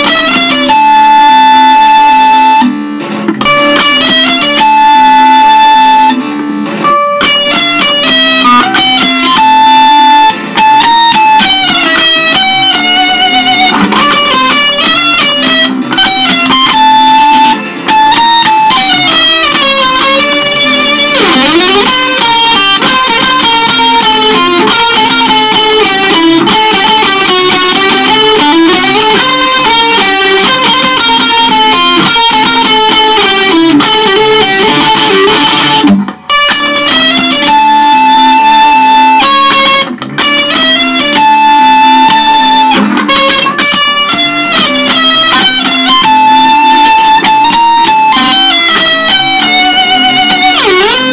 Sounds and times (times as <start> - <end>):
Bass guitar: 0.0 - 51.1
Electric guitar: 0.0 - 51.1.